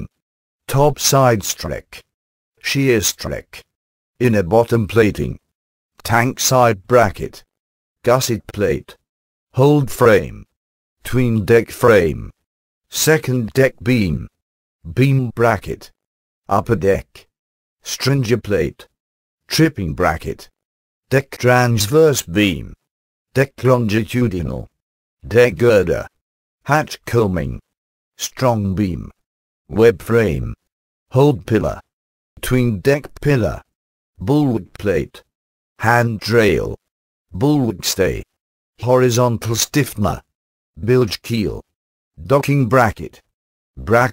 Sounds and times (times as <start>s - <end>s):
Speech: 0.0s - 44.1s.